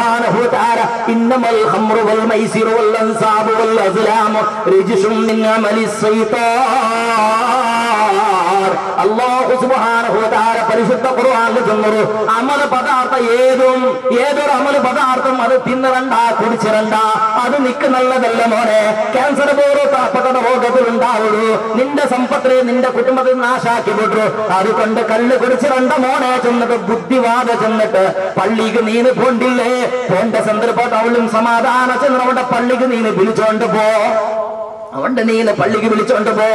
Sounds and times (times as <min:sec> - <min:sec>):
Male speech, man speaking: 0:00.0 - 0:36.5.